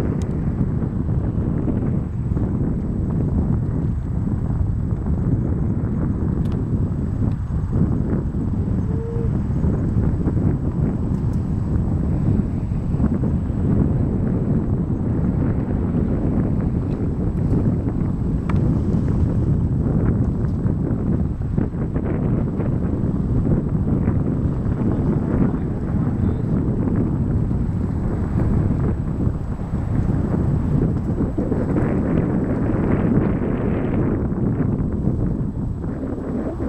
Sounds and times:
Speech: 0:25.0 - 0:26.5.

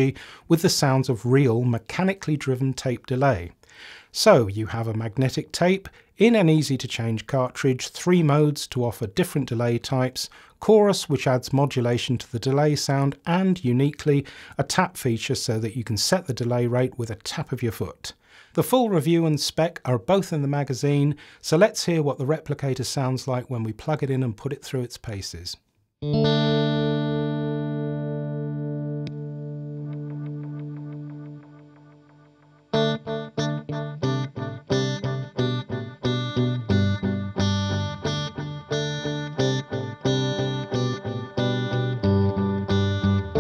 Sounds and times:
Chorus effect: 0:26.0 - 0:43.4
Guitar: 0:26.0 - 0:43.4.

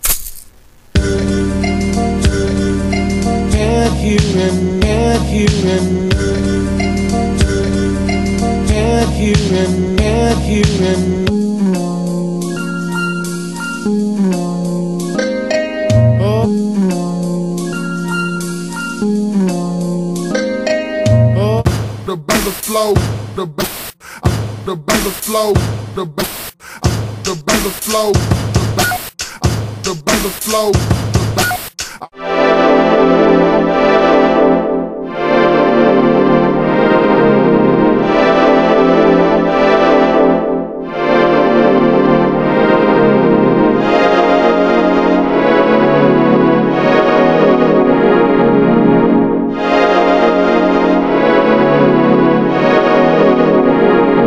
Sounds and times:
Music: 0:01.0 - 0:54.2.

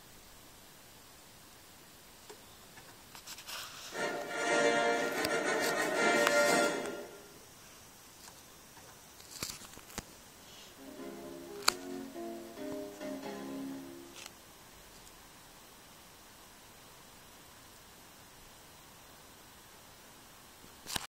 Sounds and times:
Music: 0:03.9 - 0:07.4, 0:10.8 - 0:14.3.

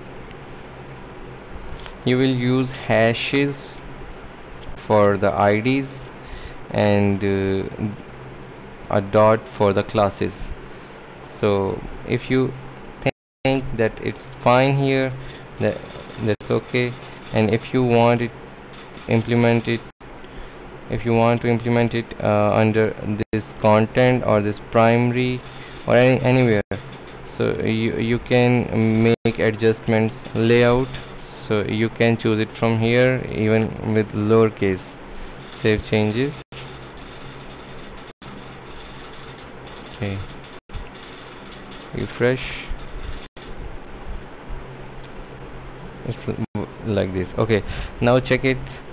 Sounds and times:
Inside, small room: 0:00.0 - 0:48.9
Speech: 0:02.0 - 0:03.8, 0:04.9 - 0:06.0, 0:06.7 - 0:08.0, 0:08.9 - 0:10.4, 0:11.4 - 0:12.6, 0:13.4 - 0:18.4, 0:19.1 - 0:19.9, 0:20.9 - 0:26.8, 0:27.4 - 0:34.8, 0:35.6 - 0:36.4, 0:40.0 - 0:40.3, 0:42.0 - 0:42.8, 0:46.1 - 0:48.7.

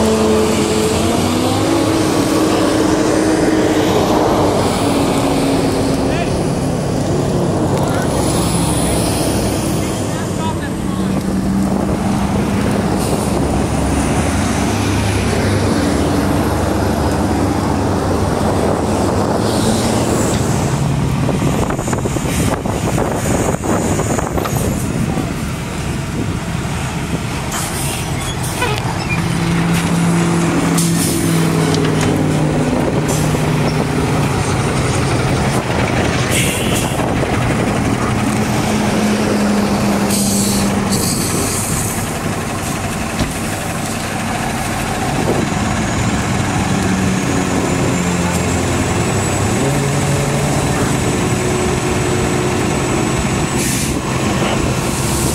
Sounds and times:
Fire: 0:00.0 - 0:55.3
Wind noise (microphone): 0:11.0 - 0:27.5, 0:32.0 - 0:38.8, 0:45.0 - 0:48.2.

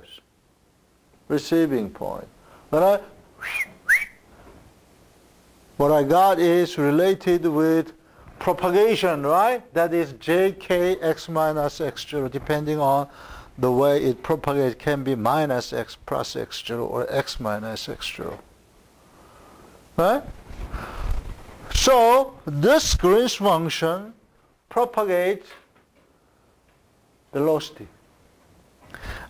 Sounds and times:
Whistling: 0:03.4 - 0:04.3.

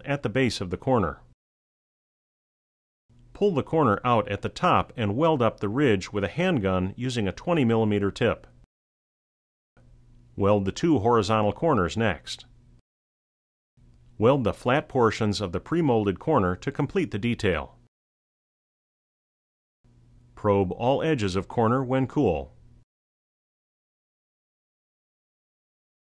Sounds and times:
Speech: 0:00.0 - 0:01.3, 0:03.4 - 0:08.6, 0:10.4 - 0:12.5, 0:14.2 - 0:17.8, 0:20.4 - 0:22.6.

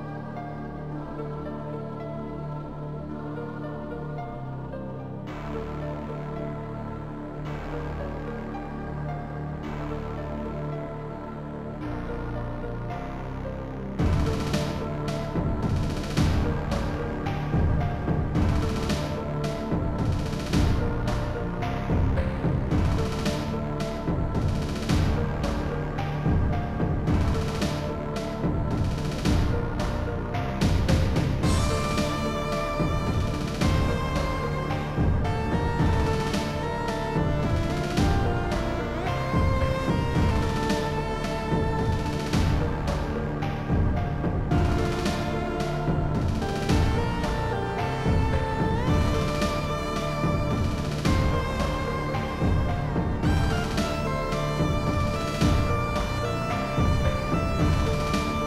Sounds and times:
Music: 0:00.0 - 0:58.4.

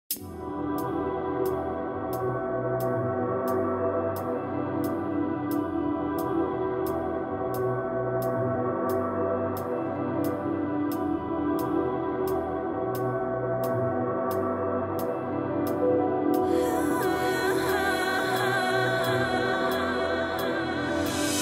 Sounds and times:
Electronic music: 0:00.1 - 0:21.4.

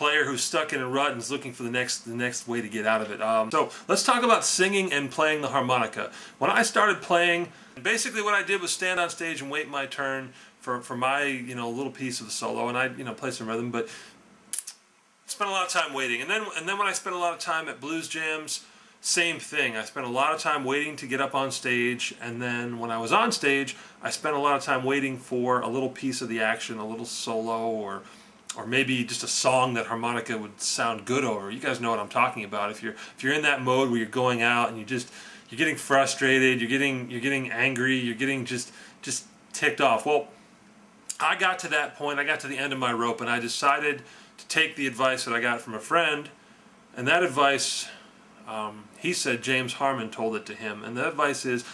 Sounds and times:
Speech: 0:00.0 - 0:13.9, 0:14.6 - 0:40.3, 0:41.1 - 0:46.4, 0:47.0 - 0:51.7.

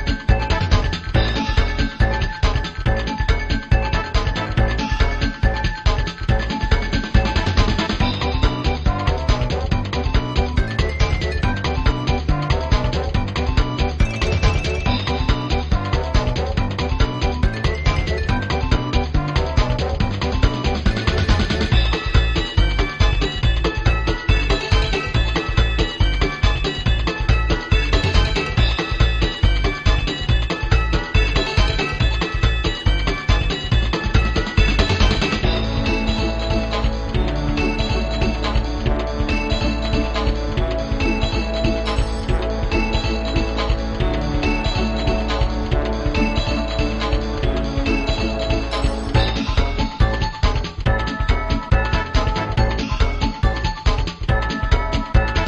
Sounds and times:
Music: 0:00.0 - 0:55.4.

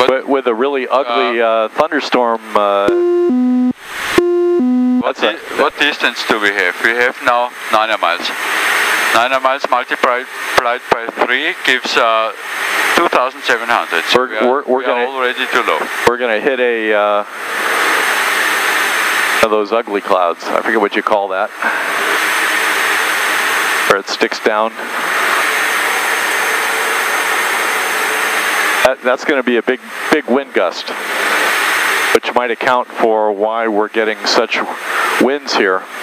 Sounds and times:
Speech: 0:00.0 - 0:03.0, 0:05.0 - 0:08.4, 0:09.2 - 0:12.4, 0:13.0 - 0:17.3, 0:19.4 - 0:21.6, 0:23.9 - 0:24.8, 0:28.8 - 0:31.0, 0:32.2 - 0:35.9.

